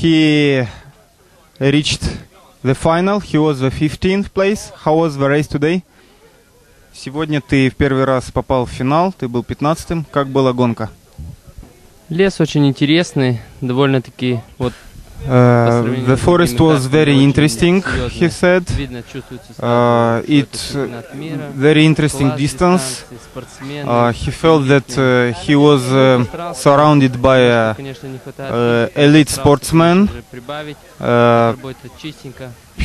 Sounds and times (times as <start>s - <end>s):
Speech: 0.0s - 32.8s.